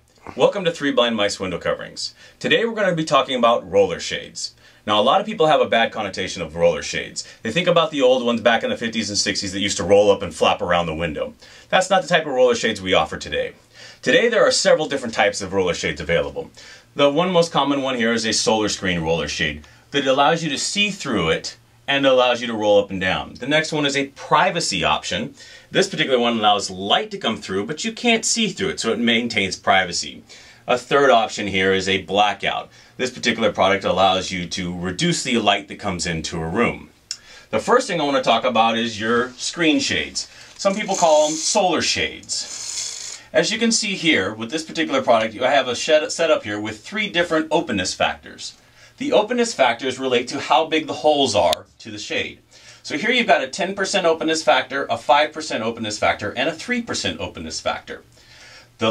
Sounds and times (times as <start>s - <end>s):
Speech: 0.2s - 42.6s, 43.3s - 58.1s.